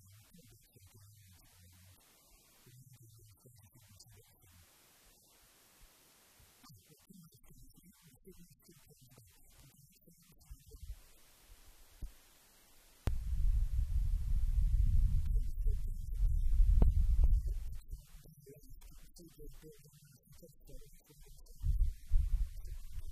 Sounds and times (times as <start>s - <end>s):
Speech: 0.0s - 4.6s, 6.6s - 11.2s, 14.8s - 23.1s.